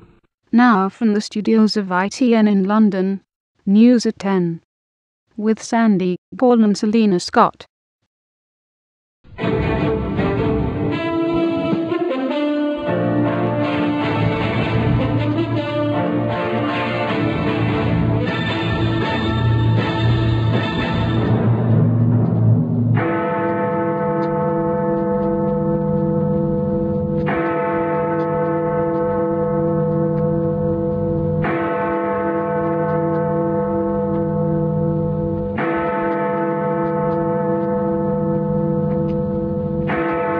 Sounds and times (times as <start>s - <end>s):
Music: 9.3s - 23.0s.